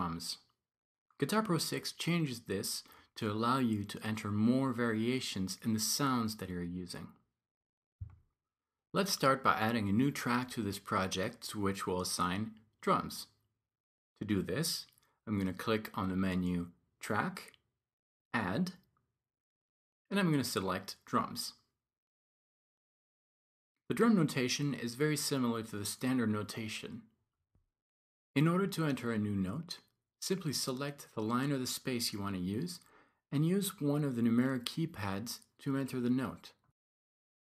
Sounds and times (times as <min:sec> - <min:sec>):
Speech: 0:00.0 - 0:00.6, 0:01.2 - 0:07.2, 0:09.0 - 0:13.4, 0:14.2 - 0:17.6, 0:18.4 - 0:18.9, 0:20.1 - 0:21.7, 0:23.9 - 0:27.1, 0:28.4 - 0:36.6.